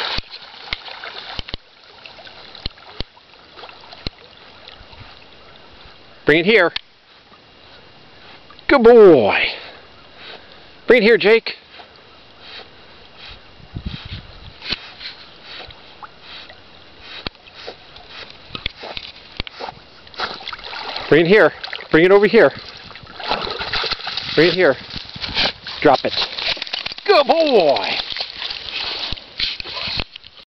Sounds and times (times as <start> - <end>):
Speech: 10.9 - 11.6, 21.1 - 22.6, 24.4 - 24.8, 25.8 - 26.2, 27.0 - 28.0.